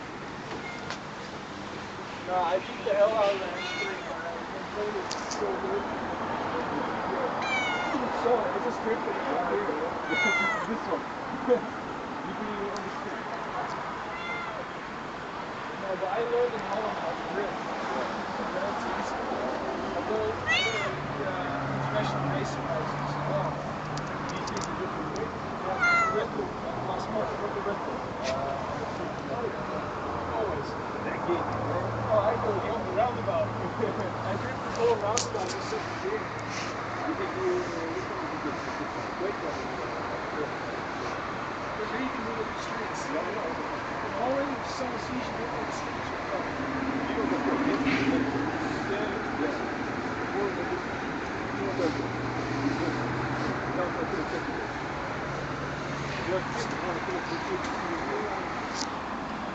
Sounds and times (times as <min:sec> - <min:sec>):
Meow: 0:00.5 - 0:01.0, 0:03.5 - 0:04.2, 0:07.4 - 0:08.1, 0:10.0 - 0:10.7, 0:14.1 - 0:14.7, 0:20.4 - 0:21.0, 0:25.8 - 0:26.3
Speech: 0:02.2 - 0:14.7, 0:15.7 - 0:23.6, 0:24.3 - 0:54.8, 0:56.1 - 0:58.9.